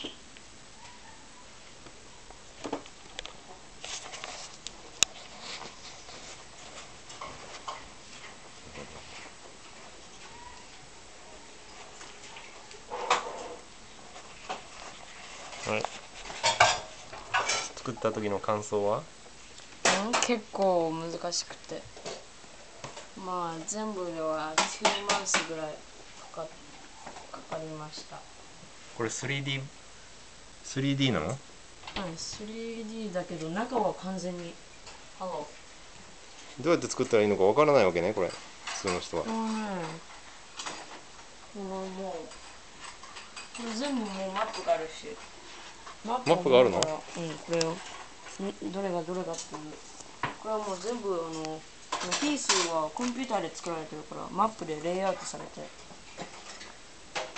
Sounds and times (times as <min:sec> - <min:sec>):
Inside, small room: 0:00.0 - 0:57.3
Dishes, pots, and pans: 0:16.4 - 0:17.7.